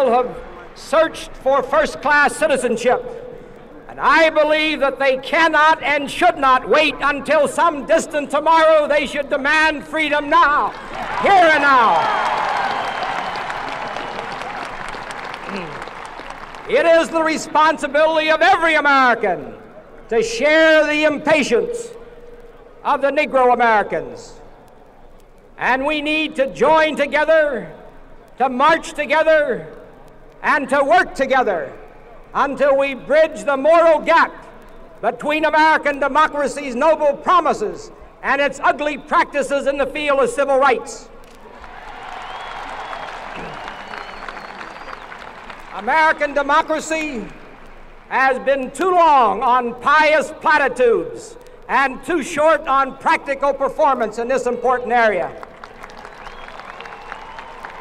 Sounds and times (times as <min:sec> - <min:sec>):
Male speech, man speaking: 0:00.0 - 0:03.1, 0:03.9 - 0:12.0, 0:16.7 - 0:22.0, 0:22.8 - 0:24.4, 0:25.6 - 0:27.8, 0:28.4 - 0:29.8, 0:30.4 - 0:31.8, 0:32.4 - 0:41.1, 0:45.8 - 0:47.3, 0:48.1 - 0:55.4
Narration, monologue: 0:00.0 - 0:12.2, 0:16.5 - 0:41.4, 0:45.5 - 0:55.6.